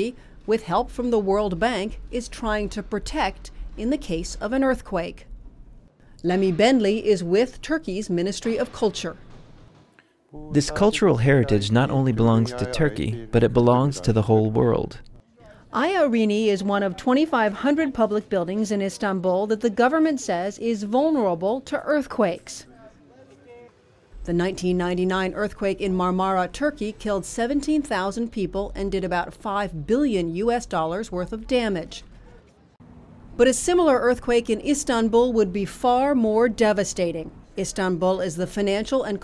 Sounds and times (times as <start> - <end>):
Speech: 0.0 - 5.2, 6.2 - 9.2, 10.4 - 23.7, 24.3 - 32.0, 33.4 - 39.2.